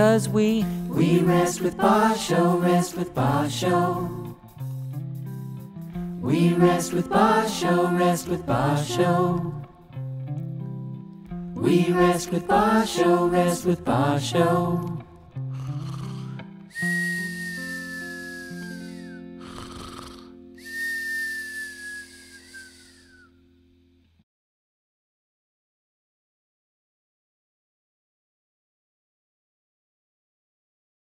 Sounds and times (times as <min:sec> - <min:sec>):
Music: 0:00.0 - 0:24.2.